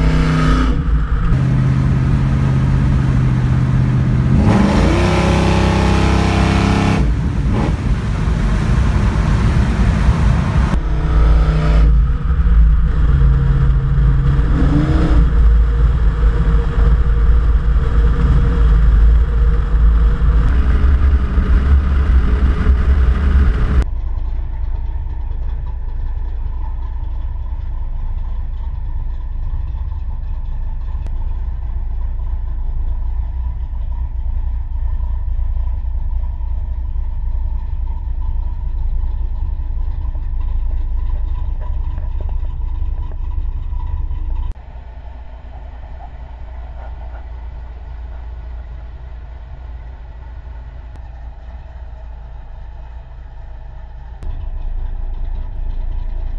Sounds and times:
Car: 0:00.0 - 0:56.3
Outside, rural or natural: 0:00.0 - 0:56.3.

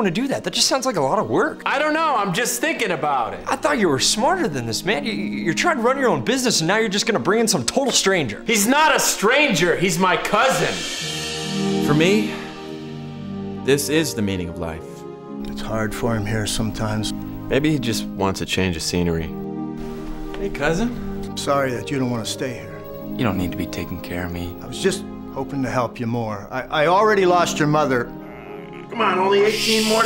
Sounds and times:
Speech: 0:00.0 - 0:10.8, 0:28.9 - 0:30.0
Music: 0:00.0 - 0:30.0.

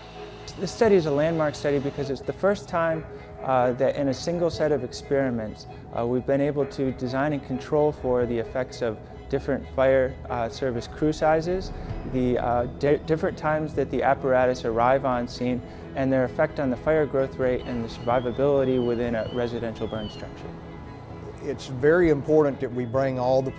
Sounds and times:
Music: 0:00.0 - 0:23.5
Speech: 0:00.5 - 0:20.4, 0:21.4 - 0:23.5.

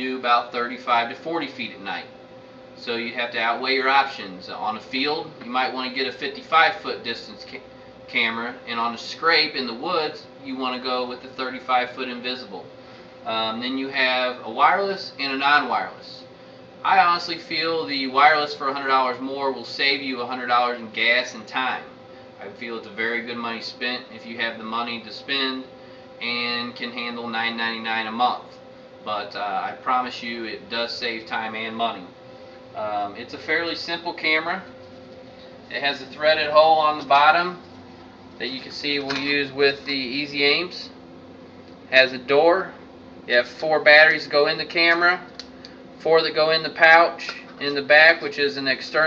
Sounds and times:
Speech: 0:00.0 - 0:02.1, 0:02.8 - 0:32.1, 0:32.8 - 0:34.8, 0:35.7 - 0:37.6, 0:38.4 - 0:41.0, 0:41.9 - 0:45.3, 0:46.0 - 0:49.0.

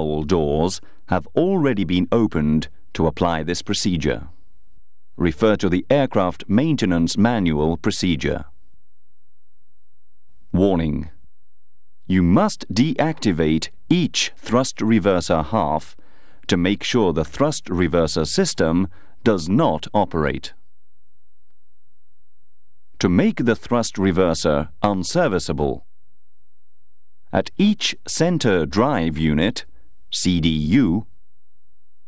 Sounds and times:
Speech: 0:00.0 - 0:04.4, 0:05.2 - 0:08.6, 0:10.5 - 0:11.2, 0:12.1 - 0:20.6, 0:23.0 - 0:25.9, 0:27.3 - 0:31.2.

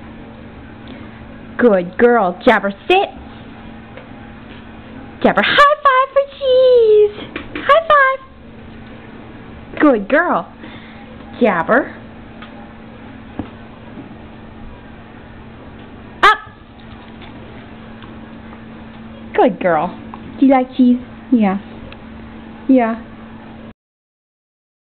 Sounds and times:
Speech: 0:01.6 - 0:03.2, 0:05.2 - 0:08.3, 0:09.8 - 0:12.0, 0:19.2 - 0:21.7, 0:22.7 - 0:23.1.

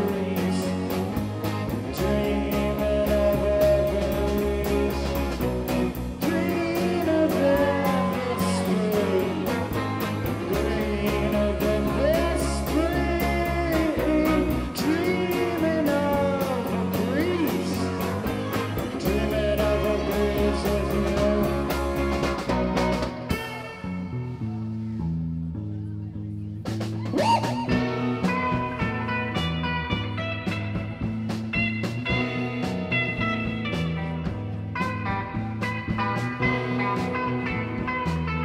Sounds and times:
Music: 0:00.0 - 0:38.4
Singing: 0:06.2 - 0:22.0.

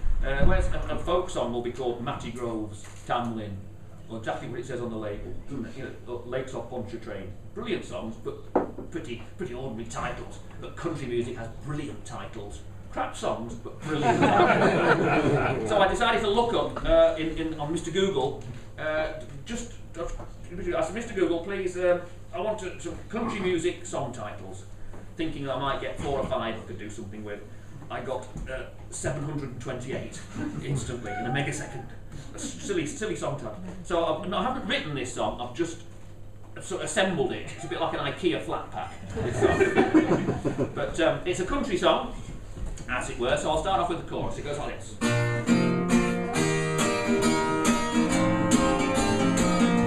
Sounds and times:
Speech: 0:00.2 - 0:14.3, 0:15.4 - 0:35.9, 0:36.6 - 0:39.0, 0:40.7 - 0:42.2, 0:42.8 - 0:45.0.

